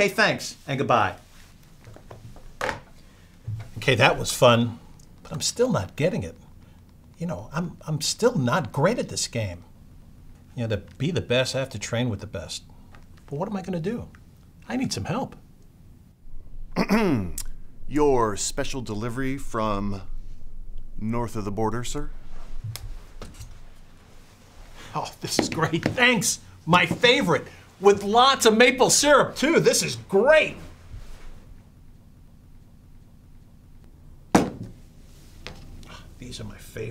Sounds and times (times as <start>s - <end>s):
Speech: 0.0s - 1.2s, 3.8s - 6.4s, 7.2s - 9.7s, 10.5s - 12.7s, 13.3s - 15.4s, 16.8s - 20.1s, 21.0s - 22.1s, 24.9s - 30.7s, 36.2s - 36.9s.